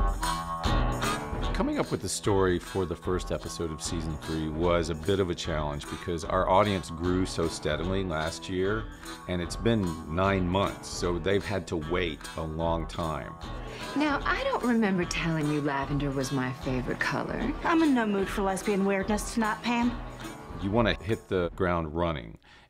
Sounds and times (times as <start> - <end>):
Music: 0.0 - 22.7
Speech: 1.6 - 13.4, 20.6 - 22.4.